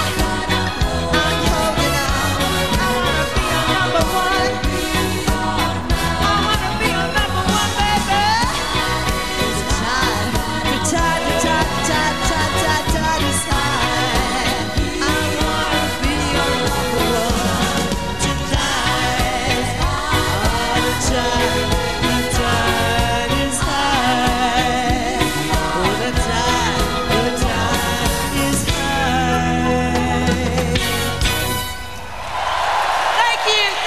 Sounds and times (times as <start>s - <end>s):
Singing: 0.0s - 31.2s
Music: 0.0s - 32.2s.